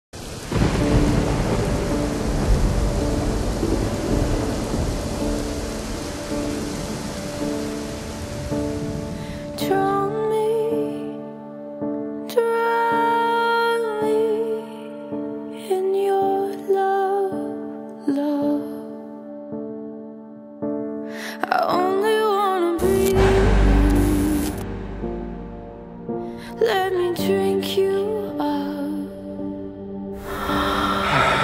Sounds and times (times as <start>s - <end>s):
Thunder: 0.2s - 9.5s, 23.2s - 25.6s
Rain on surface: 0.2s - 9.7s.